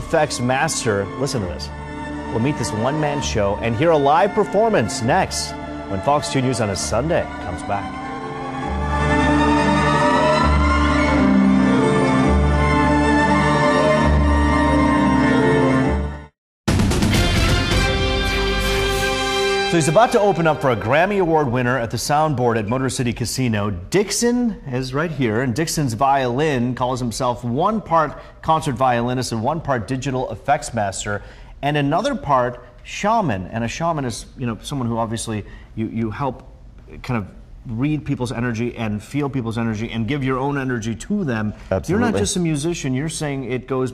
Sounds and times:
Speech: 0:02.4 - 0:07.9, 0:19.8 - 0:43.9.

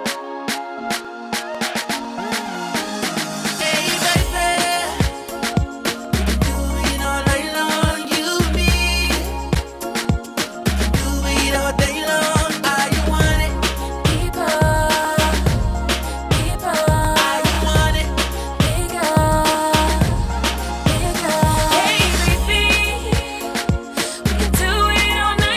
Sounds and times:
Rhythm and blues: 0:00.0 - 0:25.5.

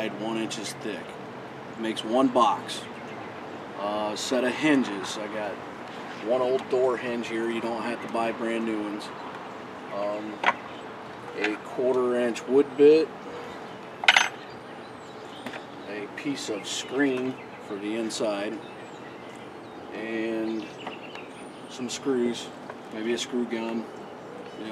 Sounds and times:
Speech: 0:00.0 - 0:01.2, 0:01.8 - 0:02.9, 0:03.8 - 0:05.6, 0:06.2 - 0:09.2, 0:09.9 - 0:10.4, 0:11.4 - 0:13.1, 0:15.9 - 0:18.6, 0:19.9 - 0:20.7, 0:21.7 - 0:23.9.

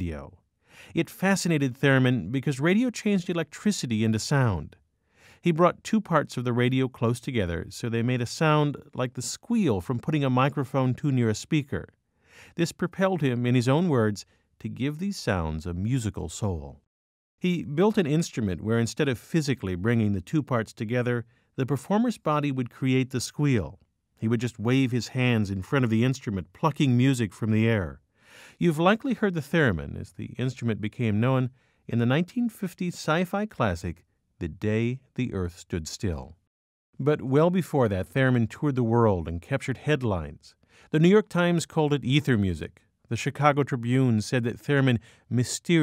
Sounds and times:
Speech: 0:00.0 - 0:04.8, 0:05.4 - 0:11.9, 0:12.5 - 0:28.0, 0:28.6 - 0:36.4, 0:37.0 - 0:45.8.

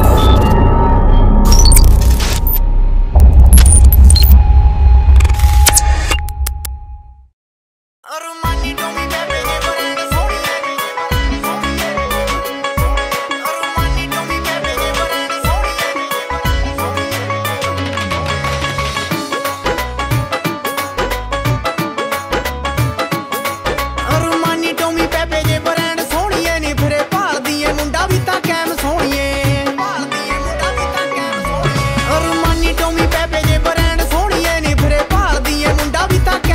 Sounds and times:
Music: 0:00.0 - 0:04.4, 0:08.1 - 0:36.5
Singing: 0:08.1 - 0:18.5, 0:24.0 - 0:36.5.

